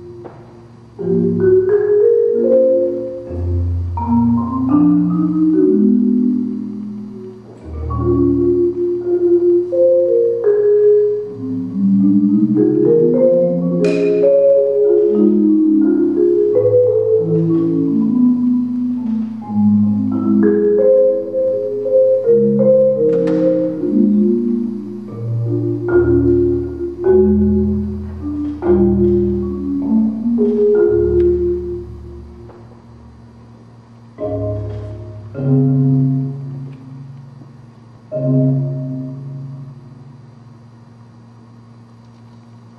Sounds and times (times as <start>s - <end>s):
Marimba, xylophone: 1.0s - 32.7s, 34.2s - 37.1s, 38.1s - 39.7s.